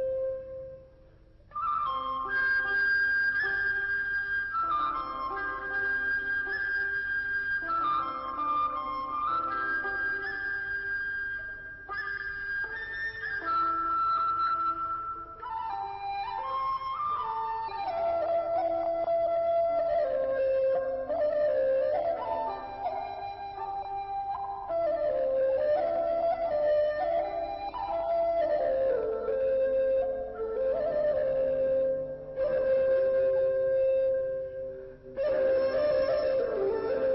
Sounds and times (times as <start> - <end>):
Music: 0.0 - 37.1.